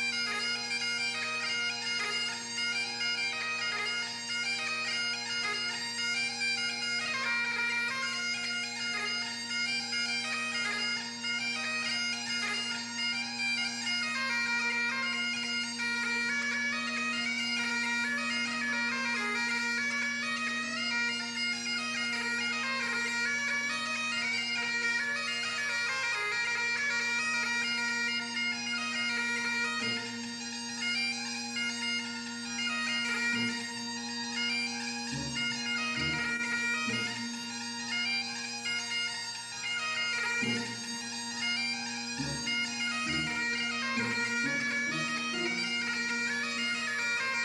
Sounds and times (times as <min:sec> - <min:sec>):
Bagpipes: 0:00.0 - 0:47.4.